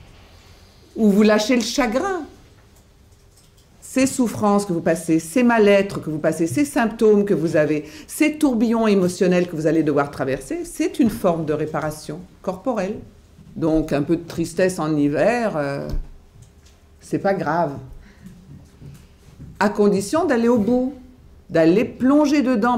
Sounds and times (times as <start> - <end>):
Speech: 1.0 - 2.4, 3.8 - 16.0, 17.0 - 17.9, 19.6 - 22.7.